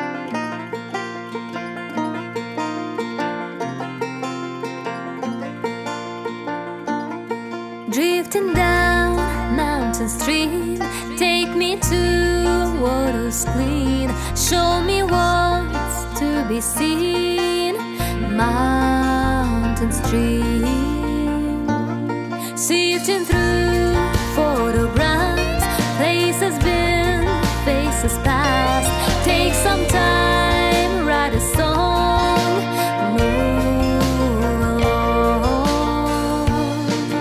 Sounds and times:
Music: 0.0 - 37.2.

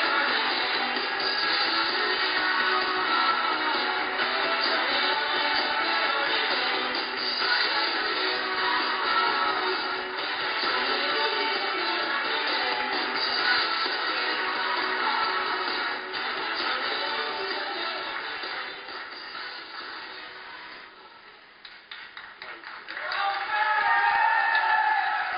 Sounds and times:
Rock and roll: 0.0 - 21.0.

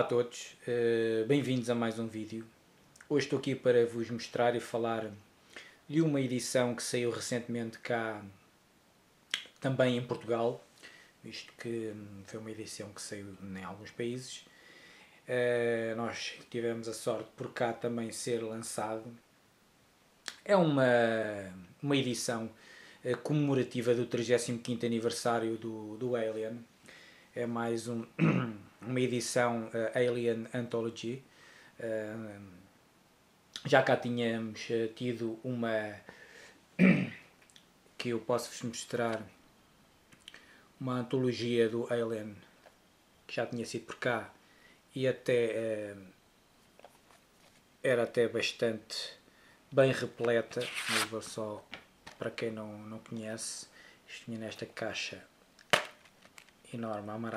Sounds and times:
Speech: 0.0 - 5.3, 5.9 - 8.4, 9.4 - 10.6, 11.2 - 14.5, 15.3 - 19.2, 20.3 - 26.7, 27.4 - 32.6, 33.6 - 36.1, 38.0 - 39.4, 40.8 - 42.5, 43.3 - 46.2, 47.8 - 55.3, 56.7 - 57.3.

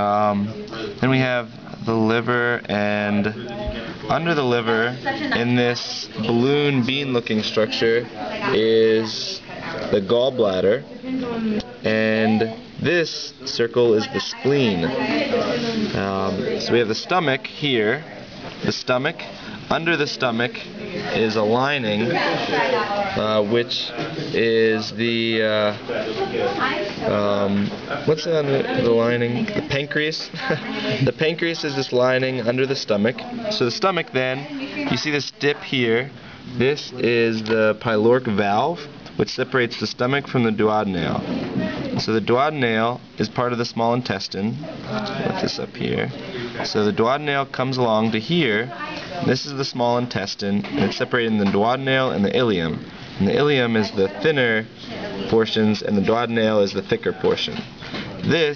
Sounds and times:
Speech: 0.0 - 58.5.

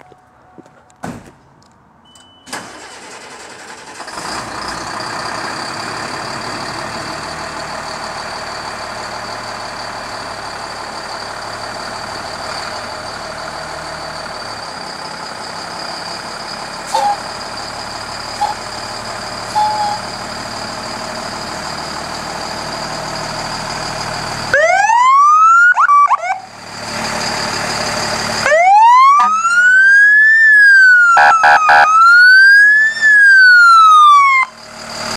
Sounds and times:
Truck: 0.0 - 35.1
Fire engine, fire truck (siren): 16.9 - 17.2, 19.5 - 20.0, 24.3 - 26.6, 27.4 - 35.1
Police car (siren): 24.5 - 26.5, 28.4 - 34.6.

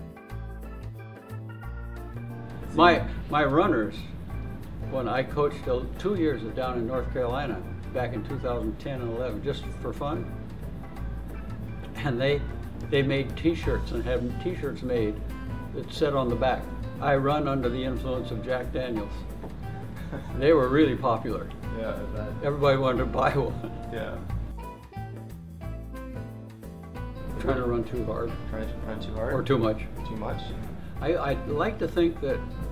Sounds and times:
Music: 0.0 - 32.7
Male speech, man speaking: 2.7 - 4.1, 4.9 - 10.3, 11.9 - 19.3, 20.4 - 24.3, 27.3 - 32.5.

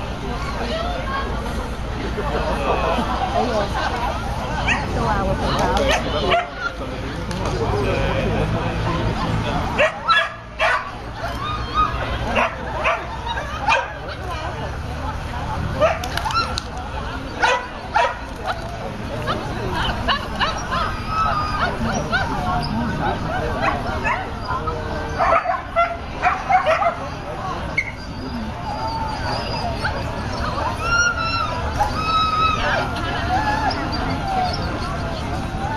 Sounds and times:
Yip: 9.8 - 14.0, 25.1 - 27.0
Speech: 11.1 - 35.7.

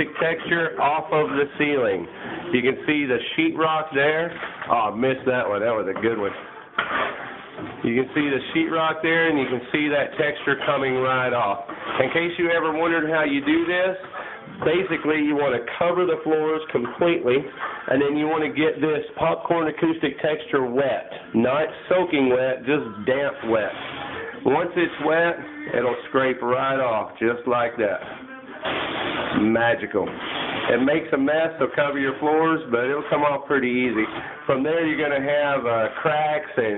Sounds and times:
Speech: 0.0 - 6.5, 7.8 - 28.2, 29.4 - 36.7.

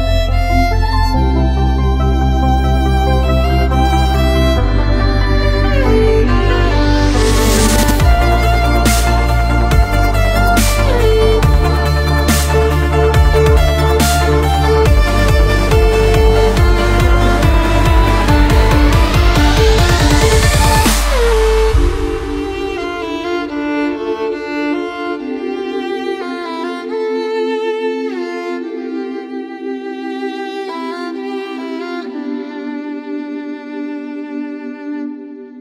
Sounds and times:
Music: 0.0 - 35.6.

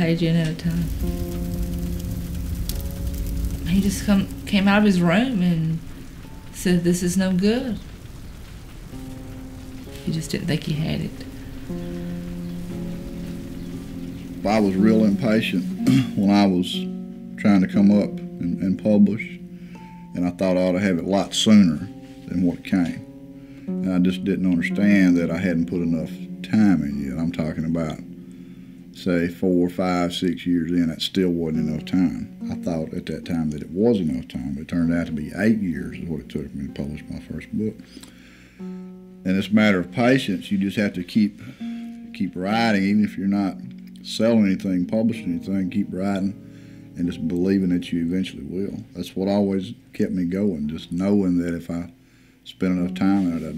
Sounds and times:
Speech: 0.0 - 0.9, 3.7 - 5.8, 6.6 - 7.8, 10.0 - 11.2, 14.4 - 19.4, 20.2 - 23.0, 23.8 - 28.0, 29.0 - 37.8, 39.3 - 41.4, 42.1 - 46.4, 47.0 - 53.5
Music: 0.0 - 53.5.

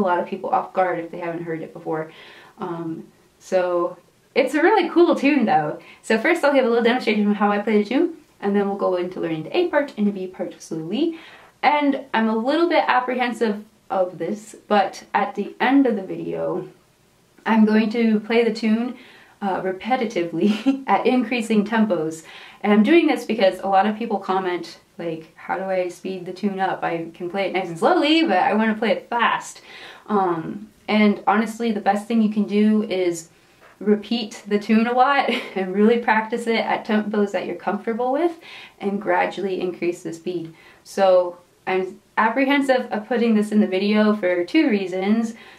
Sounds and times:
Speech: 0.0 - 16.8, 17.4 - 45.4.

